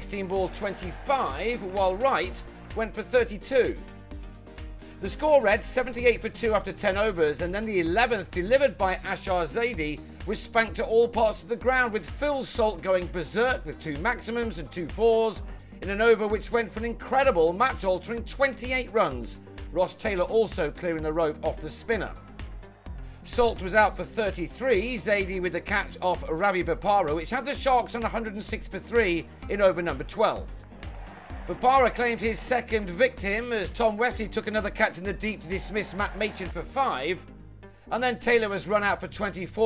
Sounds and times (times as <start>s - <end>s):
Speech: 0.0s - 3.8s, 5.0s - 22.2s, 23.3s - 30.5s, 31.5s - 37.2s, 37.9s - 39.6s
Music: 0.0s - 39.6s.